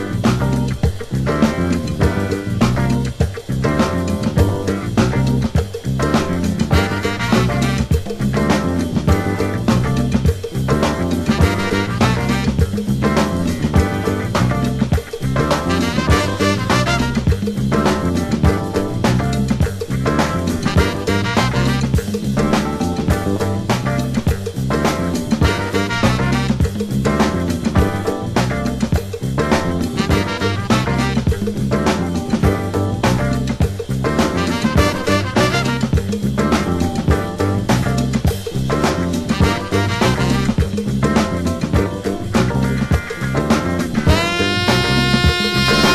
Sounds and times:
Music: 0:00.0 - 0:45.9.

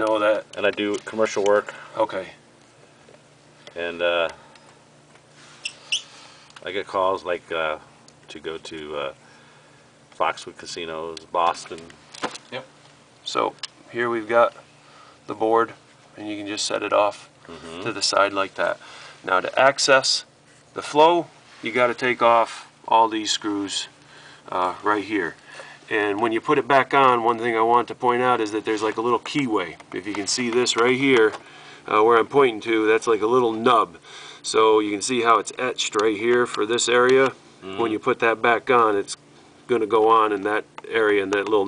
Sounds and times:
Speech: 0:00.0 - 0:02.4, 0:03.8 - 0:04.4, 0:06.6 - 0:09.2, 0:10.2 - 0:14.6, 0:15.3 - 0:41.6.

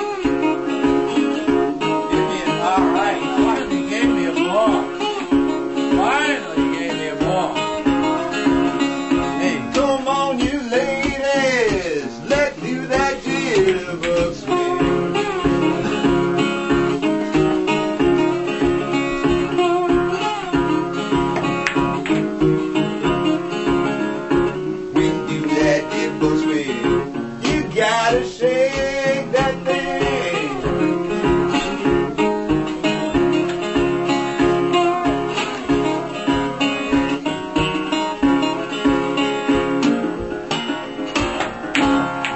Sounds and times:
Electric guitar: 0:00.0 - 0:42.3.

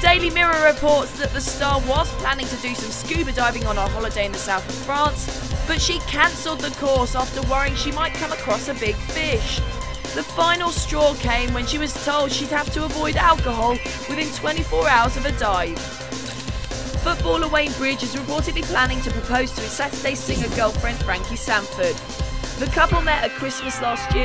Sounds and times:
Speech: 0:00.0 - 0:09.6, 0:10.2 - 0:15.8, 0:17.0 - 0:22.0, 0:22.6 - 0:24.2
Music: 0:00.0 - 0:24.2.

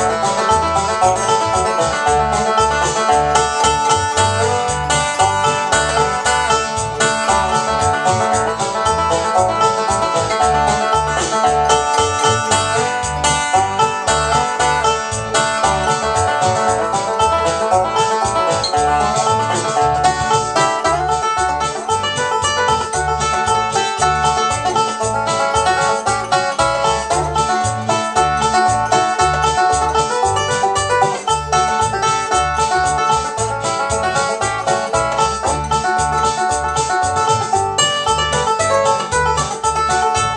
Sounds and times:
Banjo: 0:00.0 - 0:40.3
Bluegrass: 0:00.0 - 0:40.3.

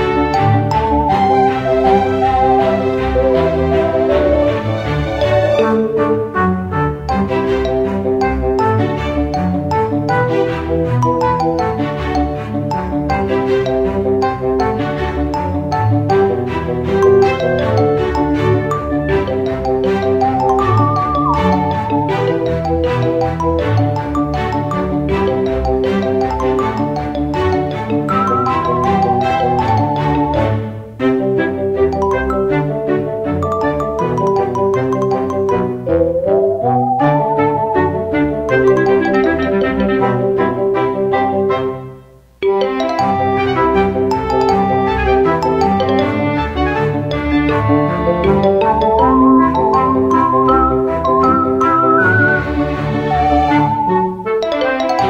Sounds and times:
Video game music: 0:00.0 - 0:41.8, 0:42.4 - 0:55.1.

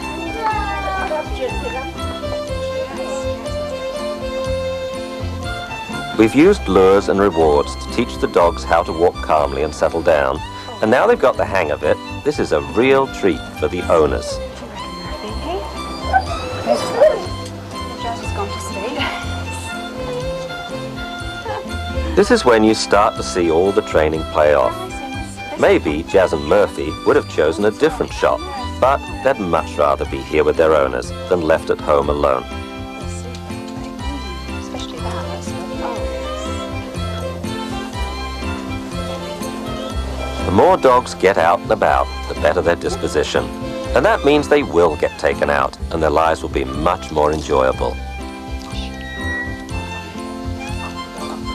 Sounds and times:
Music: 0:00.0 - 0:51.5
Speech: 0:06.2 - 0:15.6, 0:22.1 - 0:32.4, 0:33.2 - 0:36.1, 0:40.5 - 0:48.0
Whimper (dog): 0:15.8 - 0:17.5, 0:19.7 - 0:21.9, 0:50.6 - 0:51.5.

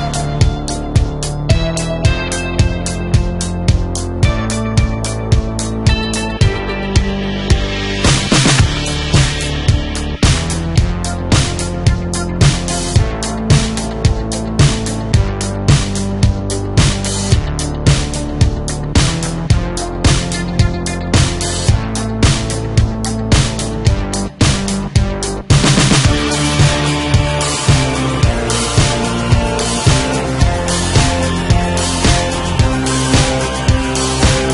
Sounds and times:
Music: 0:00.0 - 0:34.5.

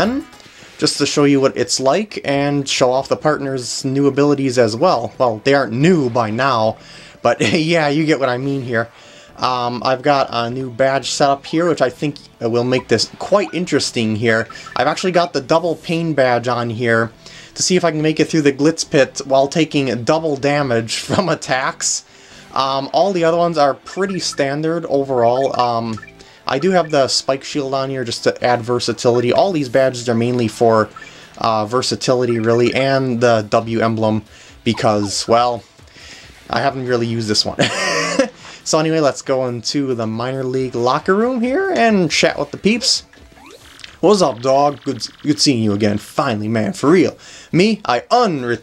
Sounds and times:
Speech: 0:00.0 - 0:22.0, 0:22.6 - 0:35.7, 0:36.5 - 0:43.1, 0:44.0 - 0:48.6
Music: 0:00.0 - 0:48.6.

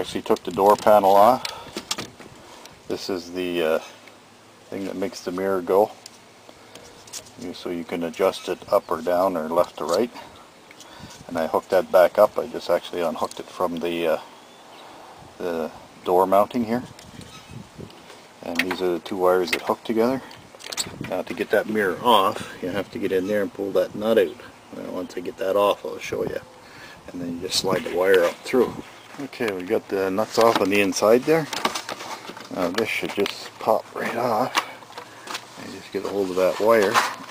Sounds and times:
Speech: 0:00.0 - 0:01.4, 0:02.9 - 0:03.9, 0:04.7 - 0:06.0, 0:07.4 - 0:10.3, 0:11.3 - 0:14.3, 0:15.4 - 0:16.9, 0:18.4 - 0:20.4, 0:21.0 - 0:26.5, 0:27.1 - 0:31.6, 0:32.5 - 0:34.8, 0:35.6 - 0:37.3.

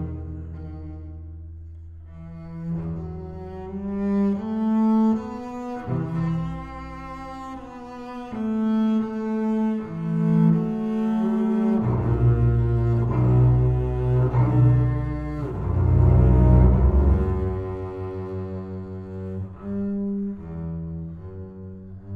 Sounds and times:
Cello: 0:00.0 - 0:22.1
Classical music: 0:00.0 - 0:22.1
Double bass: 0:00.0 - 0:22.1.

